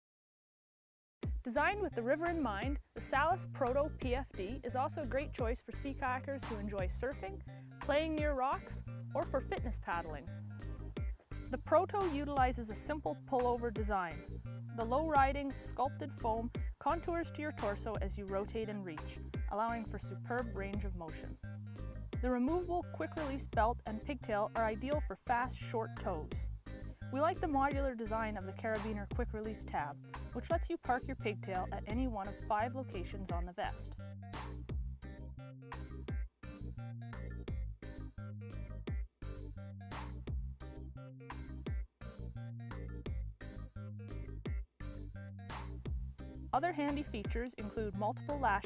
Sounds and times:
Music: 1.2 - 48.6
Speech: 1.5 - 10.3, 11.6 - 14.2, 14.8 - 21.4, 22.2 - 26.4, 27.2 - 33.9, 46.6 - 48.6.

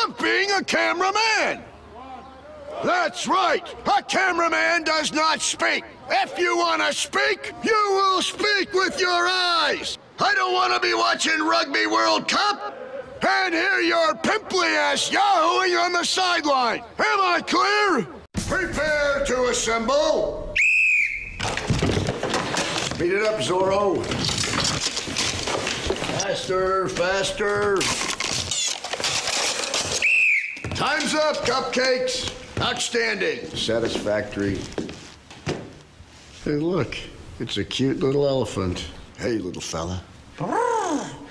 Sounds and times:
Speech: 0.0 - 20.4.

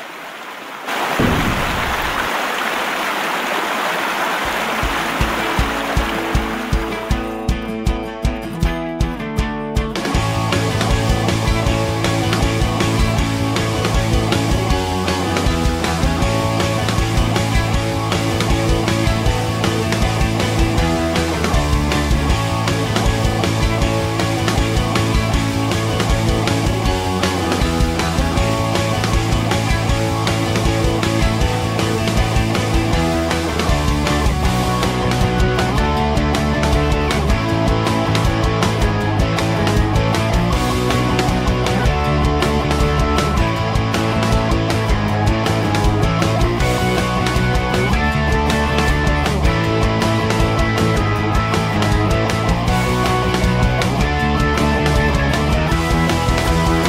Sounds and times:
Music: 4.4 - 56.8.

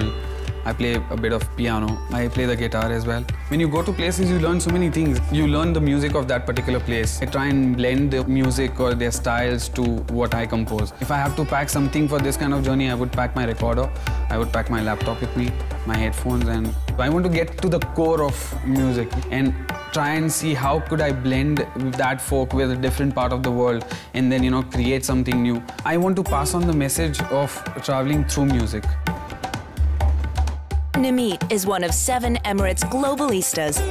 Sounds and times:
Music: 0.0 - 33.9
Speech: 0.7 - 28.9, 31.0 - 33.9.

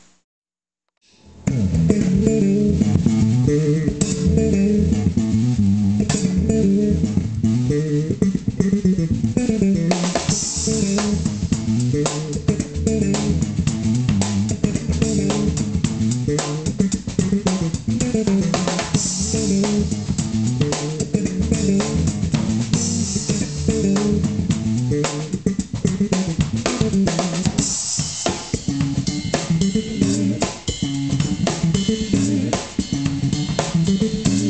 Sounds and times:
Bass guitar: 1.1 - 34.4
Drum kit: 1.2 - 34.4
Drum: 1.5 - 34.4.

